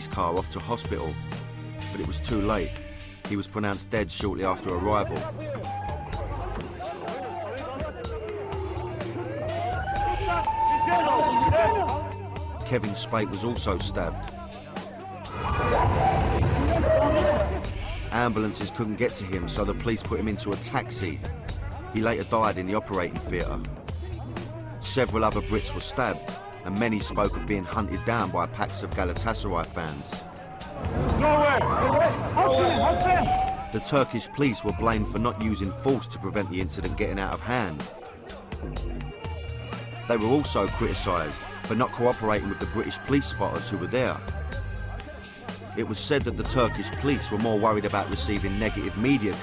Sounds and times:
Speech: 0.0s - 1.2s, 1.9s - 2.7s, 3.3s - 5.6s, 12.6s - 14.9s, 18.1s - 24.2s, 24.8s - 30.2s, 31.2s - 38.0s, 40.1s - 44.3s, 45.7s - 49.4s
Music: 0.0s - 49.4s.

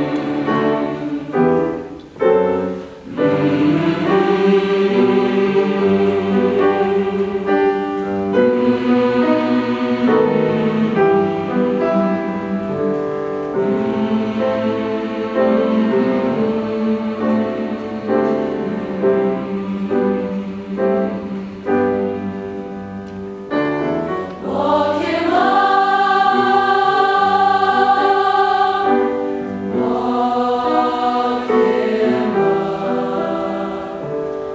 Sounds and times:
Choir: 0.0s - 34.5s.

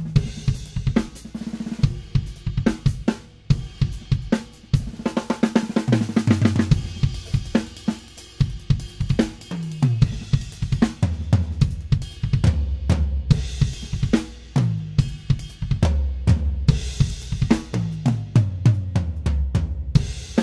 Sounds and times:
Drum: 0.0s - 20.4s
Drum kit: 0.0s - 20.4s.

